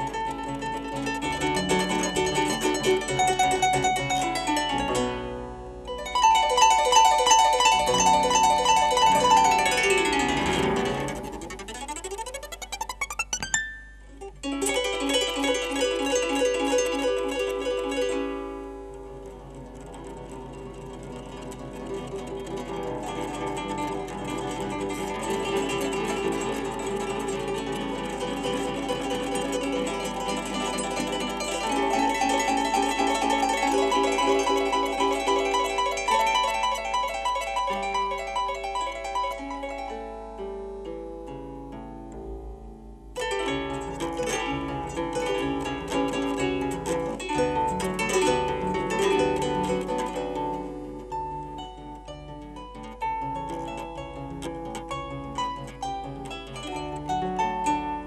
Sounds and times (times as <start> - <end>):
Harp: 0.0 - 58.0
Pizzicato: 0.0 - 58.0.